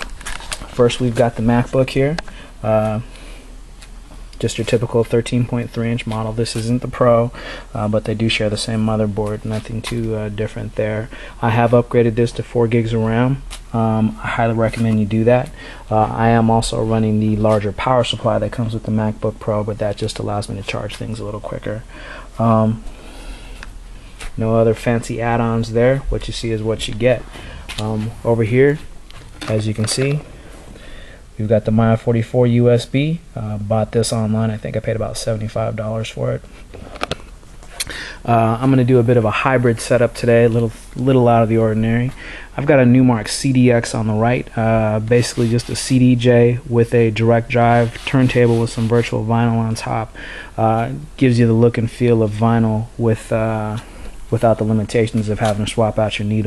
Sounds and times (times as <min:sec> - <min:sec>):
Speech: 0:00.8 - 0:03.1, 0:04.4 - 0:22.8, 0:24.4 - 0:30.3, 0:31.4 - 0:36.4, 0:38.2 - 0:56.4.